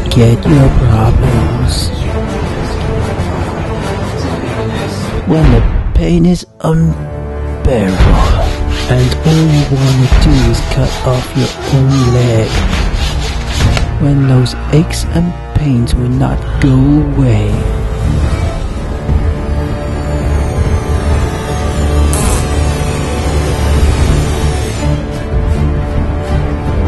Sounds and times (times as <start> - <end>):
Speech: 0.0 - 2.2, 4.5 - 12.6, 14.0 - 17.7
Music: 0.0 - 26.8.